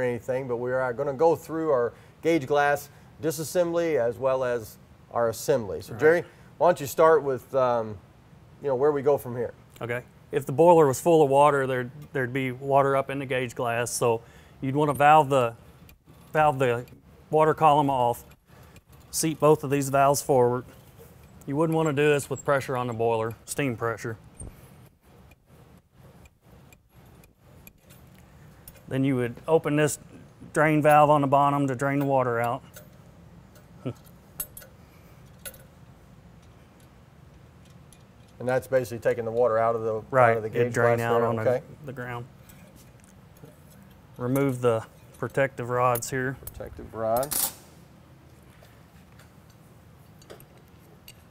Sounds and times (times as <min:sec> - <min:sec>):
Speech: 0:00.0 - 0:08.0, 0:08.6 - 0:15.6, 0:16.4 - 0:18.3, 0:19.2 - 0:20.7, 0:21.5 - 0:24.2, 0:28.9 - 0:32.6, 0:38.4 - 0:42.3, 0:44.2 - 0:47.4.